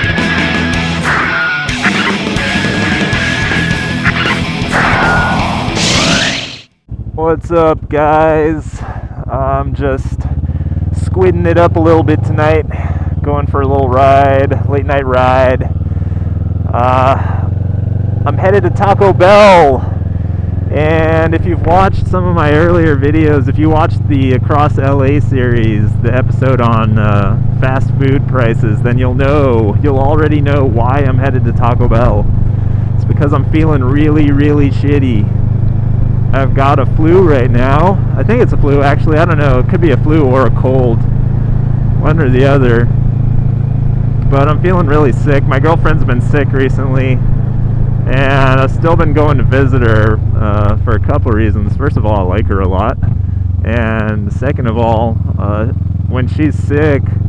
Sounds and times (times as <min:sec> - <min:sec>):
Speech: 0:07.2 - 0:10.3, 0:11.0 - 0:15.7, 0:16.7 - 0:17.3, 0:18.3 - 0:19.8, 0:20.7 - 0:32.2, 0:33.0 - 0:35.3, 0:36.4 - 0:41.0, 0:42.0 - 0:42.9, 0:44.3 - 0:47.2, 0:48.1 - 0:57.2.